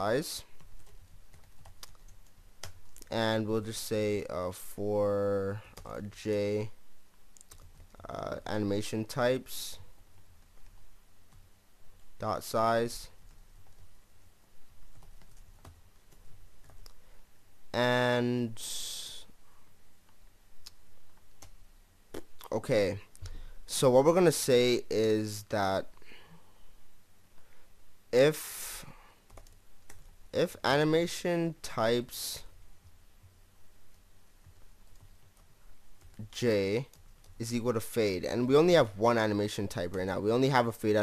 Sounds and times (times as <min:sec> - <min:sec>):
Speech: 0:00.0 - 0:00.5, 0:03.1 - 0:06.8, 0:08.0 - 0:09.8, 0:12.2 - 0:13.2, 0:17.8 - 0:19.3, 0:22.4 - 0:23.1, 0:23.7 - 0:25.9, 0:28.2 - 0:28.9, 0:30.4 - 0:32.5, 0:36.2 - 0:41.0
Computer keyboard: 0:00.5 - 0:03.1, 0:07.4 - 0:08.1, 0:14.8 - 0:17.0, 0:21.1 - 0:21.6, 0:29.3 - 0:30.2, 0:34.4 - 0:37.4.